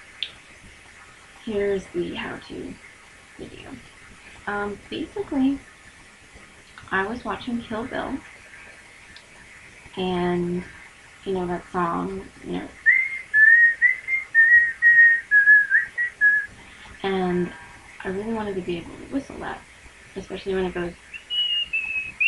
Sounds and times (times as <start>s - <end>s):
Speech: 1.4s - 2.8s, 3.4s - 3.8s, 4.4s - 5.6s, 6.8s - 8.3s, 10.0s - 12.8s, 17.0s - 19.6s, 20.2s - 21.0s
Whistling: 12.8s - 16.5s, 21.1s - 22.2s.